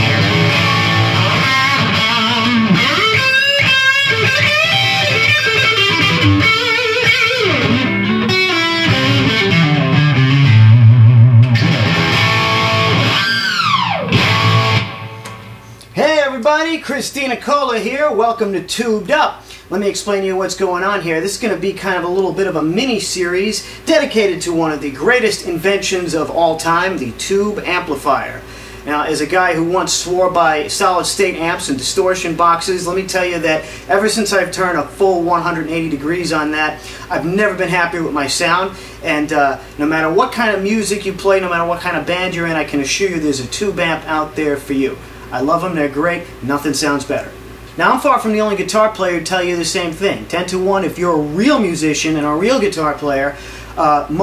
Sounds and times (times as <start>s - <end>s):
Music: 0.0s - 15.8s
Speech: 16.0s - 54.2s.